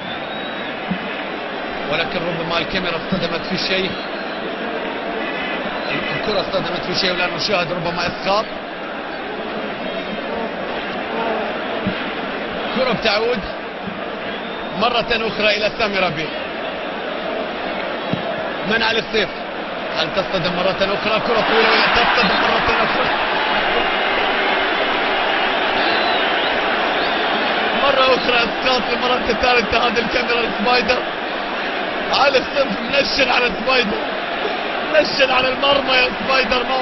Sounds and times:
Speech: 0:01.9 - 0:04.0, 0:05.9 - 0:08.5, 0:12.8 - 0:13.6, 0:14.8 - 0:16.3, 0:18.7 - 0:19.4, 0:20.0 - 0:23.1, 0:27.8 - 0:31.1, 0:32.1 - 0:34.0, 0:34.9 - 0:36.8.

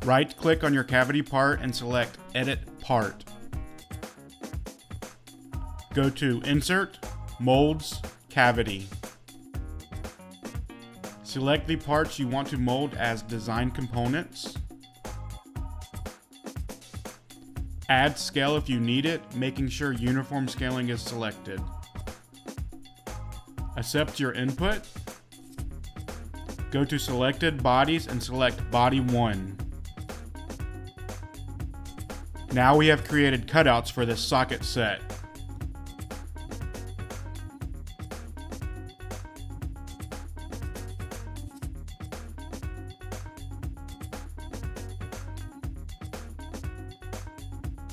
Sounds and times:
Speech: 0:00.0 - 0:03.3, 0:05.9 - 0:08.9, 0:11.3 - 0:14.6, 0:17.9 - 0:21.7, 0:23.8 - 0:24.8, 0:26.7 - 0:29.6, 0:32.5 - 0:35.1
Music: 0:00.0 - 0:47.9.

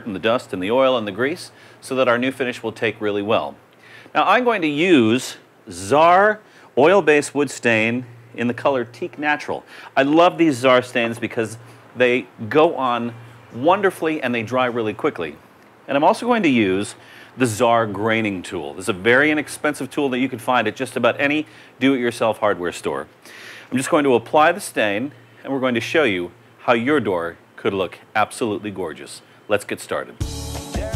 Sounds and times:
Speech: 0:00.0 - 0:23.1, 0:23.7 - 0:30.2.

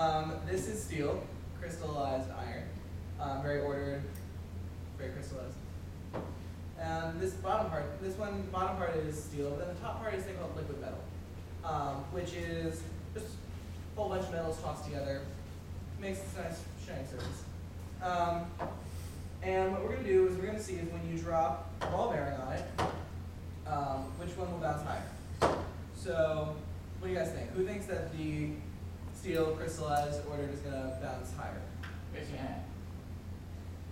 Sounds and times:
Speech: 0:00.0 - 0:04.2, 0:05.0 - 0:05.6, 0:06.8 - 0:15.4, 0:16.0 - 0:18.6, 0:19.4 - 0:22.9, 0:23.6 - 0:25.2, 0:26.0 - 0:32.8.

